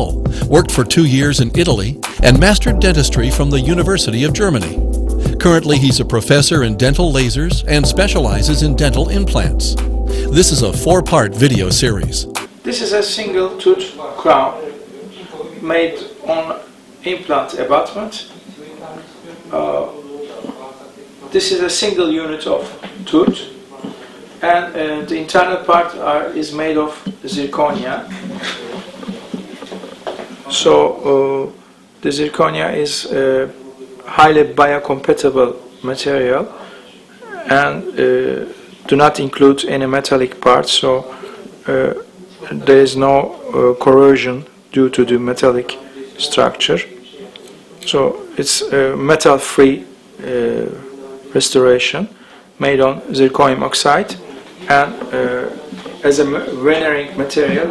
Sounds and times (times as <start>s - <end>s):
Speech: 0.0s - 28.9s, 30.4s - 57.7s.